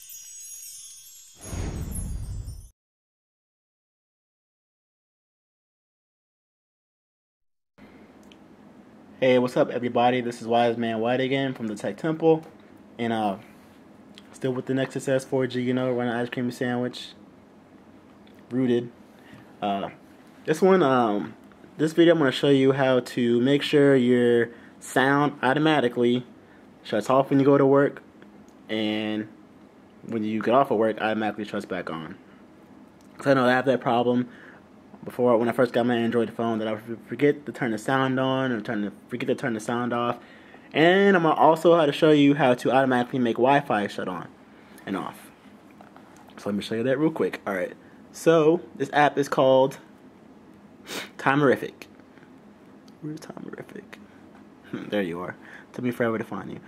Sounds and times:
Speech: 9.2s - 13.5s, 14.3s - 17.2s, 18.5s - 19.0s, 19.6s - 28.1s, 28.7s - 29.4s, 30.0s - 32.2s, 33.2s - 34.3s, 35.0s - 45.4s, 46.4s - 49.9s, 51.2s - 51.9s, 53.0s - 54.0s, 54.7s - 56.6s.

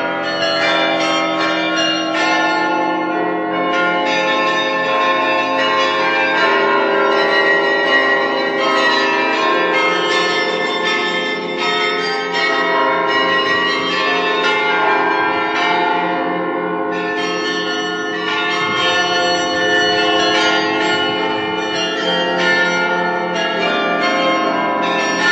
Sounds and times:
Bell: 0.0s - 25.3s.

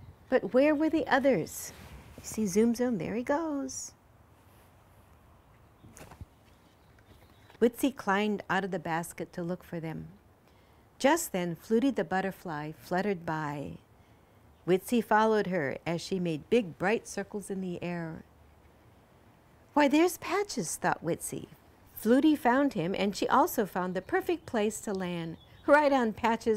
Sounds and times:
Speech: 0.3s - 4.0s, 7.6s - 10.2s, 11.0s - 13.8s, 14.7s - 18.3s, 19.8s - 26.5s.

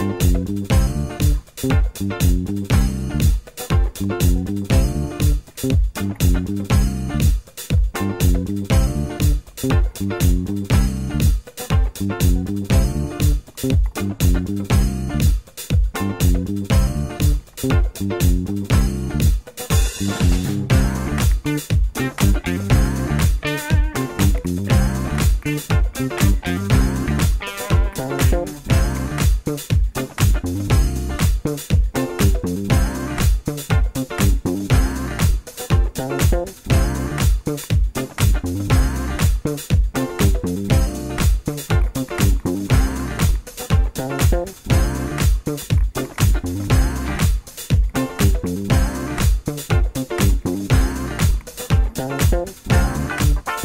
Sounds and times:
Music: 0.0s - 53.6s.

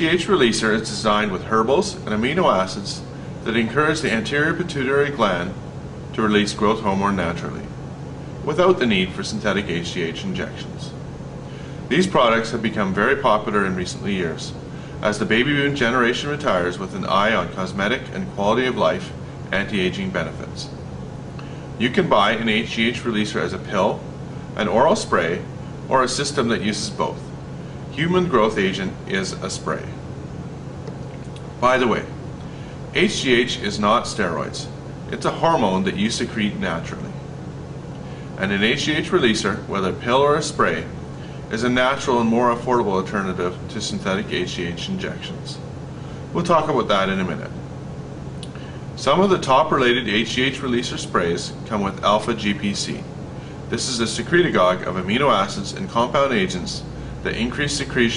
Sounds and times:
Speech: 0.0s - 7.8s, 8.4s - 11.0s, 11.9s - 20.8s, 21.8s - 27.3s, 27.9s - 30.0s, 31.6s - 32.2s, 32.9s - 37.2s, 38.4s - 45.7s, 46.3s - 47.6s, 49.0s - 53.1s, 53.7s - 58.1s.

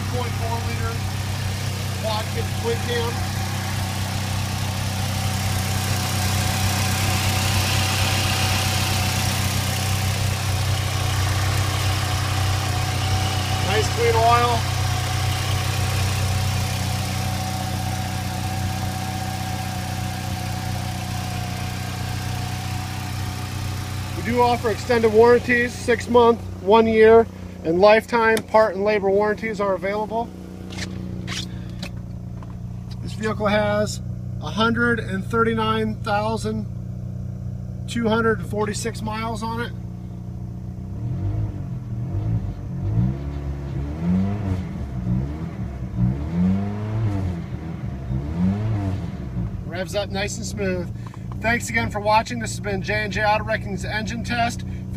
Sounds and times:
Speech: 0.0s - 1.0s, 2.0s - 3.2s, 13.6s - 14.7s, 24.2s - 30.3s, 33.0s - 36.7s, 37.9s - 39.8s, 49.7s - 54.9s
Idling: 0.0s - 40.9s, 49.4s - 54.9s.

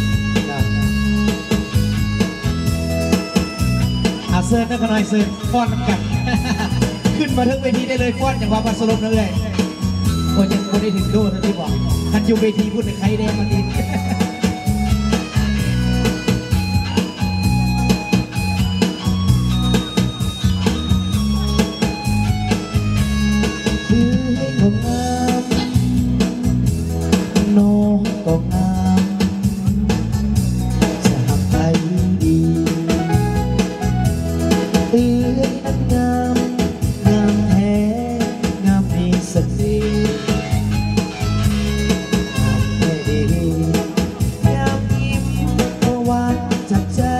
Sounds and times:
Music: 0.0s - 47.1s
Speech: 7.2s - 9.6s, 44.4s - 45.9s.

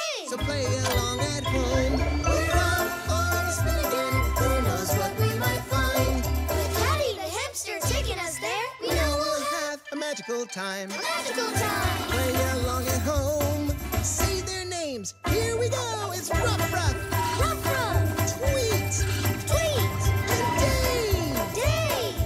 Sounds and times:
Music: 0.0s - 22.2s.

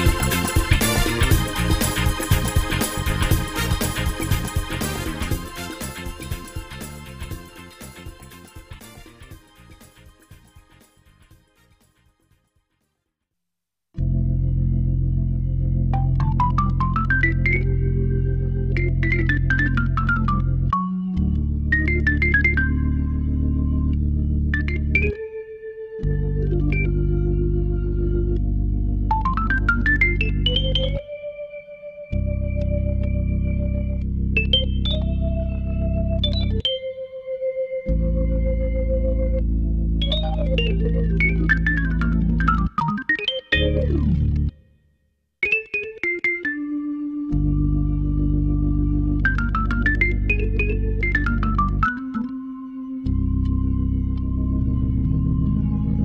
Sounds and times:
Electric piano: 0.0s - 10.6s, 14.0s - 44.5s, 45.5s - 56.0s.

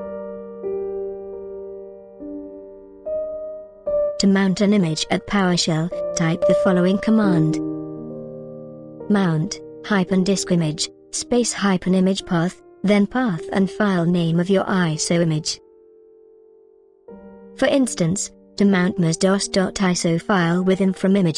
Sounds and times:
Music: 0.0s - 21.3s
Speech: 4.2s - 7.6s, 9.1s - 15.6s, 17.6s - 21.3s.

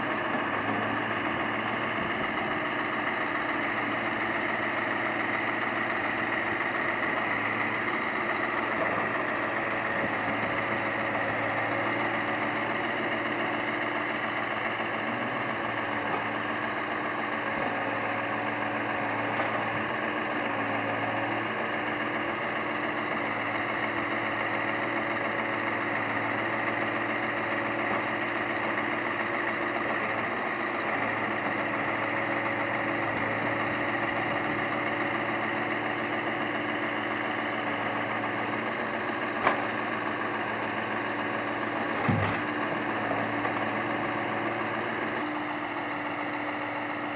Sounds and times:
Vehicle: 0.0s - 47.1s.

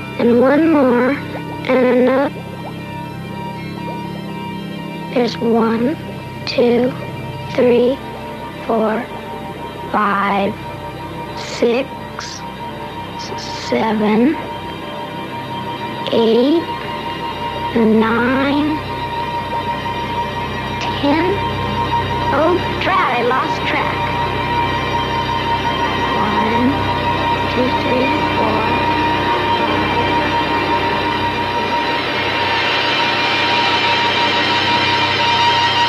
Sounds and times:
Music: 0.0s - 35.8s
Speech: 0.2s - 2.3s, 5.2s - 7.0s, 8.7s - 9.1s, 10.0s - 10.6s, 13.2s - 14.4s, 16.1s - 16.8s, 17.8s - 18.8s, 20.8s - 21.4s, 22.3s - 24.1s, 26.2s - 26.8s, 27.5s - 28.8s.

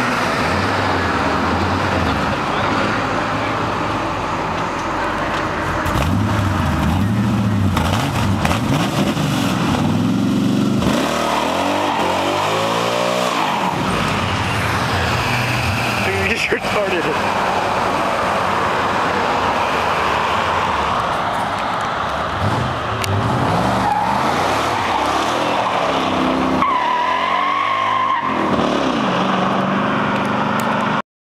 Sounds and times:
Car: 0.0s - 31.0s.

